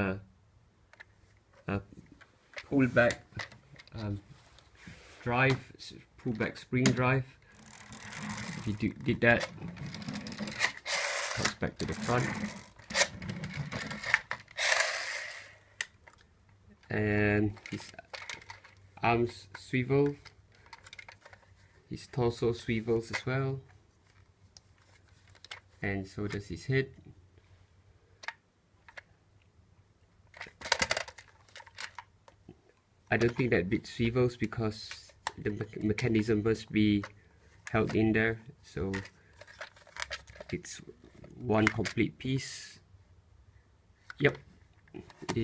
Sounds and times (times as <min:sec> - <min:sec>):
Speech: 0:00.0 - 0:00.3, 0:01.6 - 0:01.9, 0:02.7 - 0:03.3, 0:03.9 - 0:04.3, 0:05.2 - 0:07.4, 0:08.6 - 0:09.6, 0:11.4 - 0:12.5, 0:16.8 - 0:18.0, 0:19.0 - 0:20.2, 0:21.9 - 0:23.7, 0:25.8 - 0:27.0, 0:33.1 - 0:39.1, 0:40.5 - 0:42.9, 0:44.2 - 0:44.5.